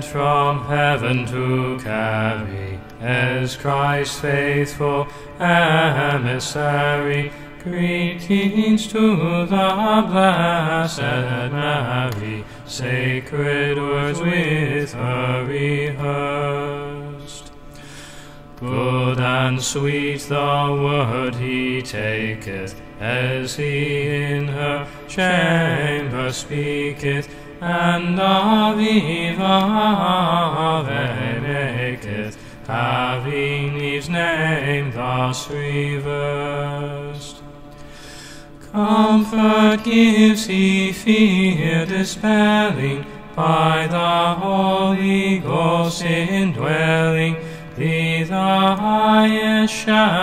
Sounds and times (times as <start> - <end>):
Mantra: 0.0 - 17.5, 18.6 - 37.5, 38.6 - 50.2.